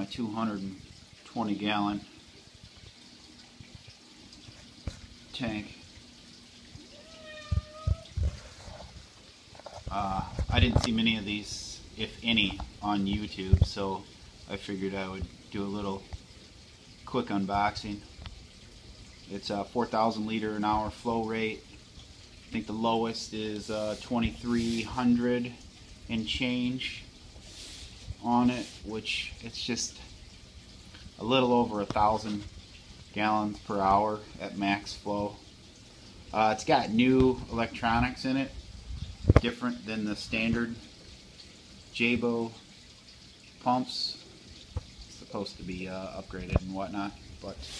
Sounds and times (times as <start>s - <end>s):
Speech: 0.0s - 2.1s, 5.3s - 5.8s, 9.9s - 16.1s, 17.1s - 18.1s, 19.3s - 21.7s, 22.5s - 27.1s, 28.2s - 30.1s, 31.2s - 32.5s, 33.1s - 35.4s, 36.3s - 38.6s, 39.4s - 40.9s, 42.0s - 42.6s, 43.6s - 44.2s, 45.2s - 47.7s.